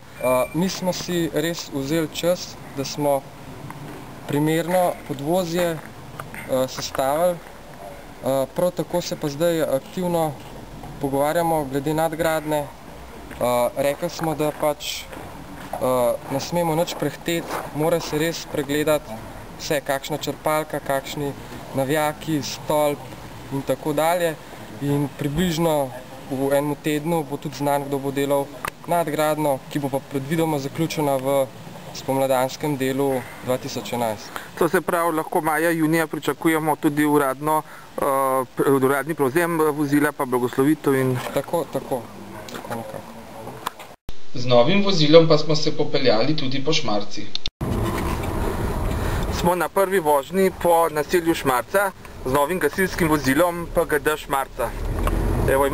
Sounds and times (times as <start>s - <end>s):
Speech: 0.2s - 3.2s, 4.3s - 5.8s, 6.5s - 10.4s, 11.0s - 12.7s, 13.4s - 15.1s, 15.8s - 43.7s, 44.4s - 47.3s, 49.3s - 54.8s, 55.5s - 55.7s.